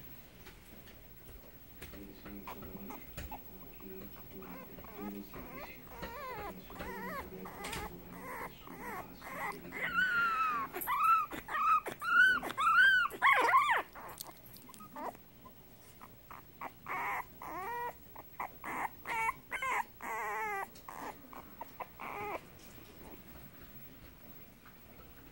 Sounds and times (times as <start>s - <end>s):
Whimper (dog): 2.5s - 15.2s, 16.0s - 22.4s.